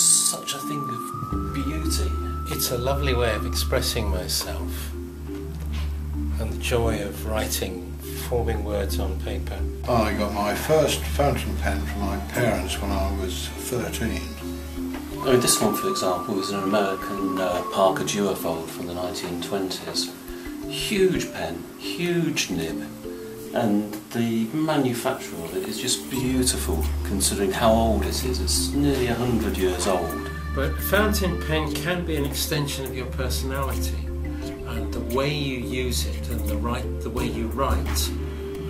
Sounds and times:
Speech: 0.0s - 5.0s, 6.4s - 14.4s, 15.2s - 22.9s, 23.5s - 34.0s, 34.6s - 38.2s
Music: 0.0s - 38.6s.

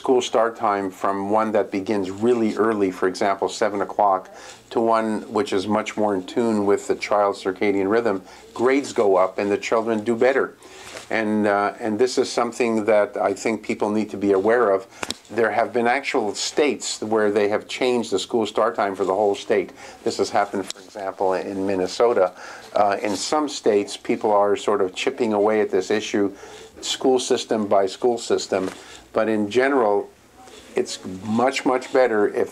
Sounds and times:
Speech: 0.0s - 32.5s.

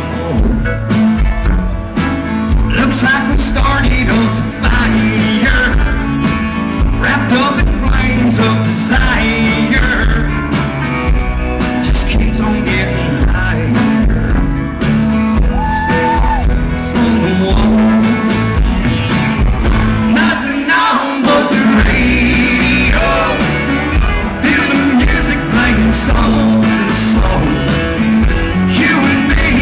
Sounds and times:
Music: 0.0s - 29.6s.

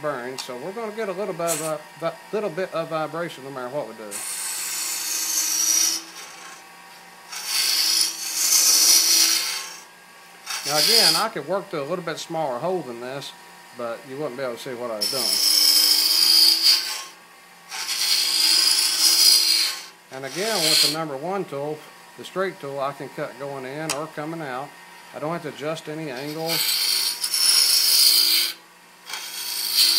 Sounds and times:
Speech: 0.0s - 4.2s, 10.7s - 15.4s, 20.1s - 26.6s.

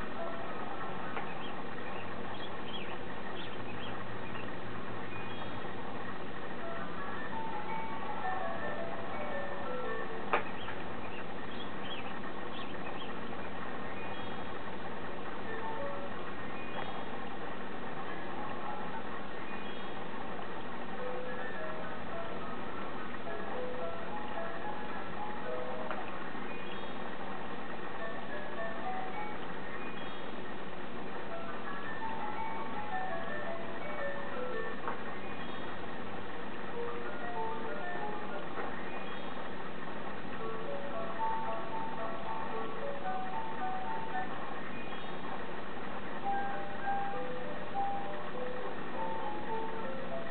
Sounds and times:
Music: 0.0s - 35.8s, 36.4s - 50.3s.

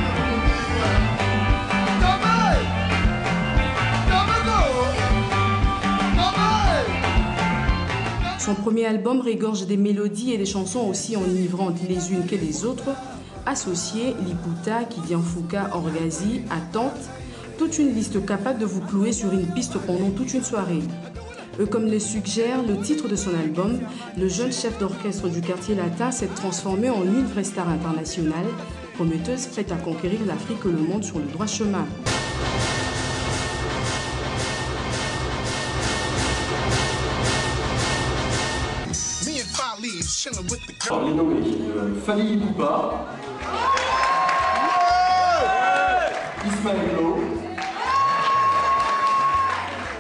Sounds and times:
Rock and roll: 0.0s - 8.4s, 32.1s - 41.0s.

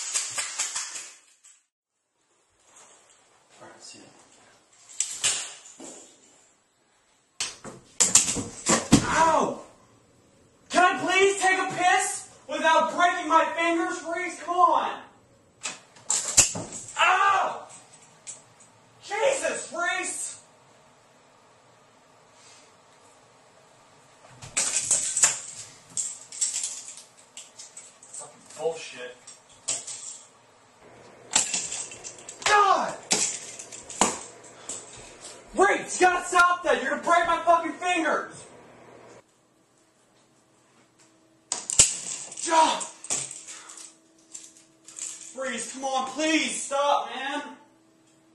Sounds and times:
Speech: 3.5s - 4.3s, 9.0s - 9.7s, 10.7s - 15.2s, 19.0s - 20.4s, 28.2s - 29.2s, 32.5s - 33.0s, 35.6s - 38.4s, 42.4s - 43.0s, 45.4s - 47.7s.

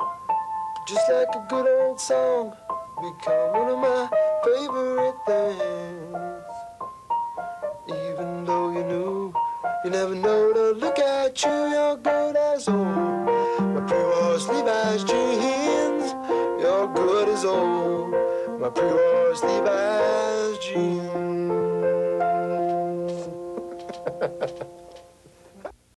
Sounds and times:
Piano: 0.0s - 25.6s.

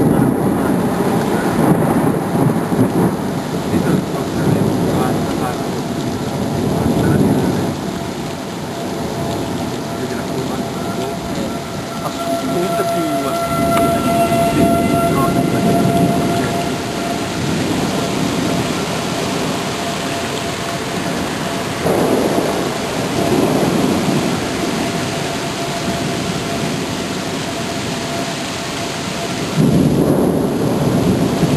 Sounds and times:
Waterfall: 0.0s - 31.5s.

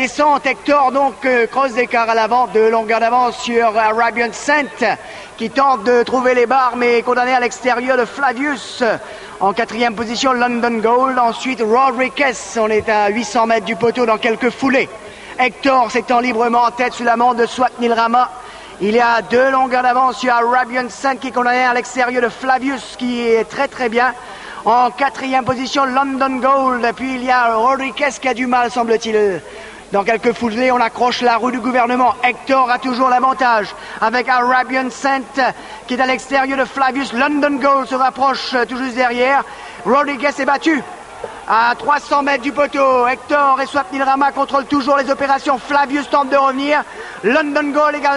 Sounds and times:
Speech: 0.0s - 48.1s.

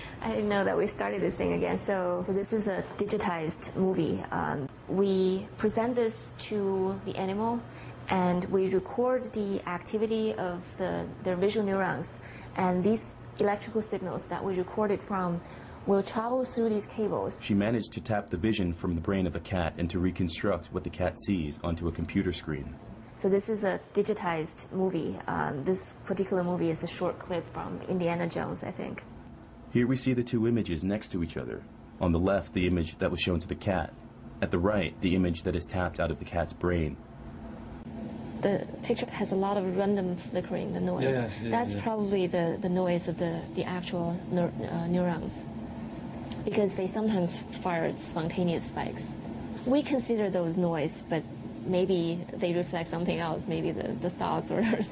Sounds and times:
Speech: 0.2s - 29.0s, 29.8s - 37.0s, 38.4s - 45.4s, 46.4s - 49.1s, 49.7s - 54.9s.

